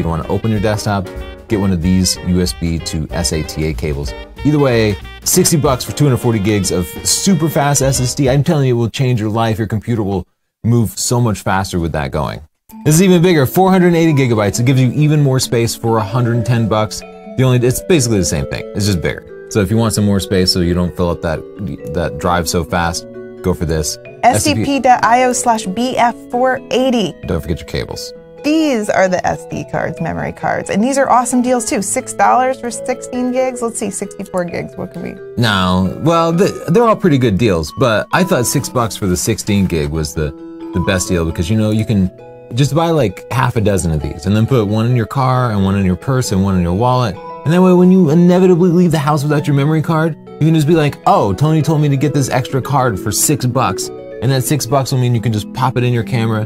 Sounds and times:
Music: 0.0 - 10.1, 10.7 - 56.4
Speech: 0.0 - 56.4.

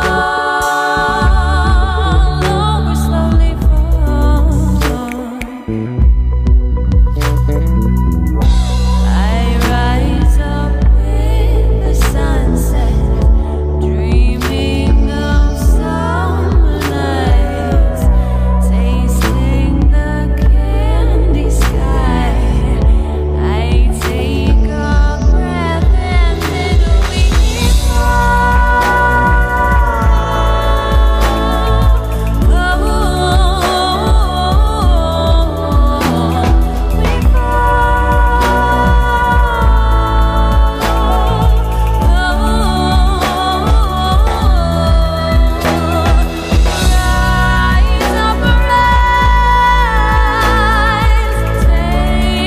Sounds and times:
Singing: 0.0 - 6.3, 8.4 - 52.4
Soul music: 0.0 - 52.4.

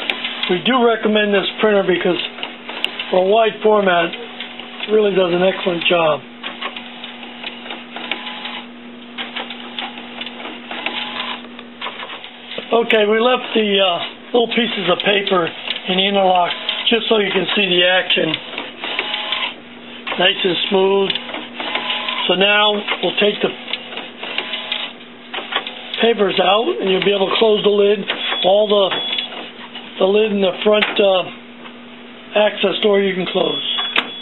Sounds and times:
Printer: 0.0 - 31.4, 32.4 - 34.2
Speech: 0.5 - 2.3, 3.1 - 4.2, 4.8 - 6.2, 12.7 - 18.4, 20.2 - 21.2, 22.2 - 23.6, 26.0 - 29.0, 30.0 - 31.4, 32.3 - 33.7.

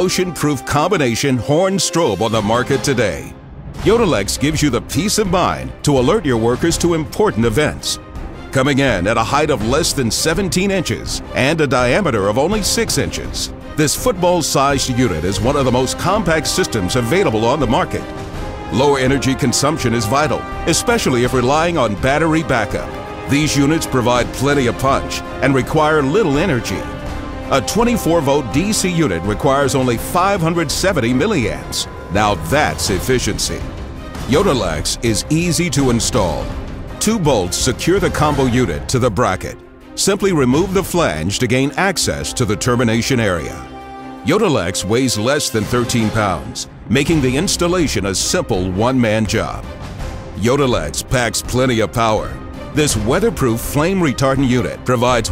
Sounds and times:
Speech: 0.0 - 18.1, 18.7 - 26.9, 27.5 - 49.6, 50.4 - 55.3
Music: 0.0 - 55.3.

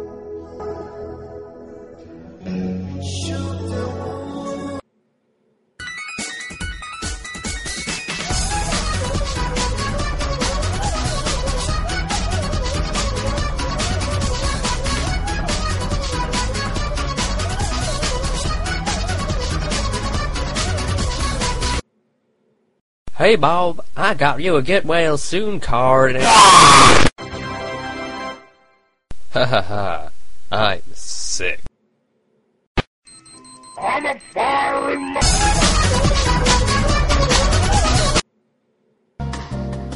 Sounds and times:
Music: 0.0 - 4.8, 5.8 - 21.8, 27.2 - 29.0, 35.2 - 38.2, 39.2 - 39.9
Speech: 23.1 - 26.2, 30.5 - 31.7, 33.8 - 35.2.

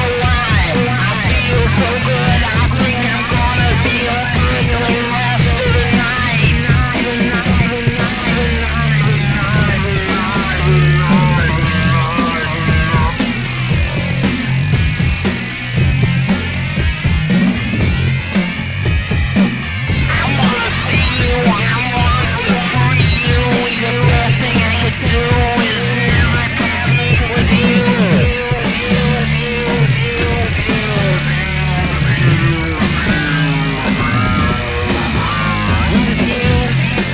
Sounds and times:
Music: 0.0 - 37.1.

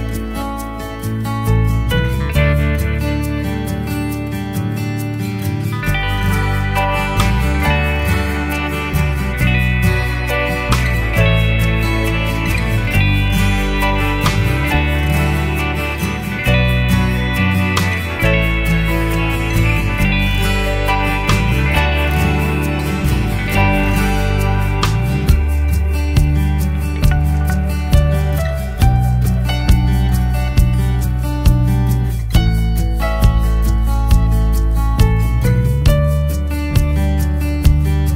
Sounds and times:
Music: 0.0 - 38.1.

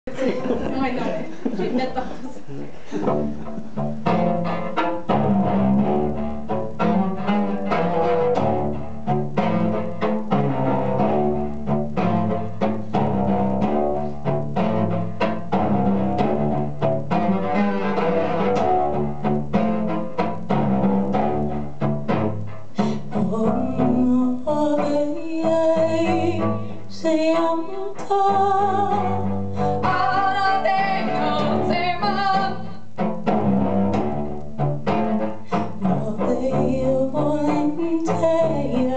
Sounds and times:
Double bass: 0.1 - 38.9
Speech: 0.4 - 2.1.

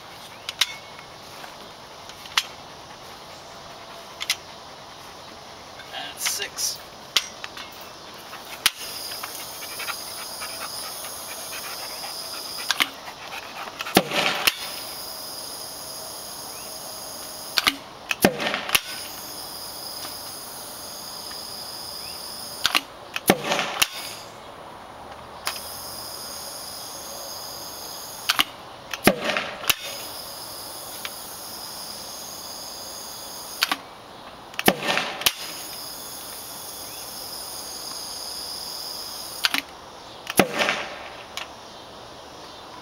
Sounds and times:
Outside, urban or manmade: 0.0 - 42.8.

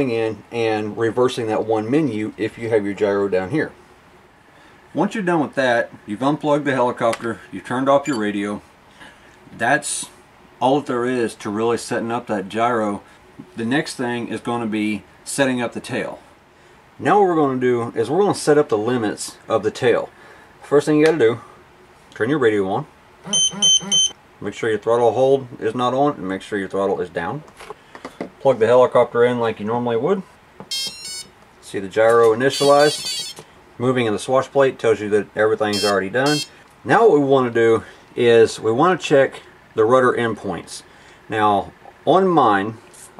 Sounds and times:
Speech: 0.0 - 3.8, 4.9 - 8.6, 9.5 - 16.2, 17.0 - 21.5, 22.1 - 22.9, 24.4 - 27.5, 28.4 - 30.3, 31.6 - 33.0, 33.8 - 43.2
Inside, small room: 0.0 - 43.2
Smoke detector, smoke alarm: 23.3 - 24.2, 30.7 - 31.3, 32.5 - 33.4, 35.7 - 36.5.

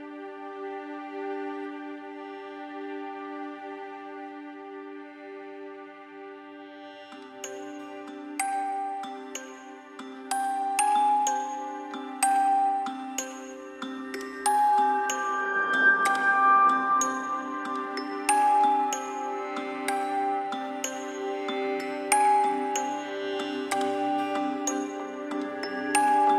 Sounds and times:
Music: 0.0 - 26.3.

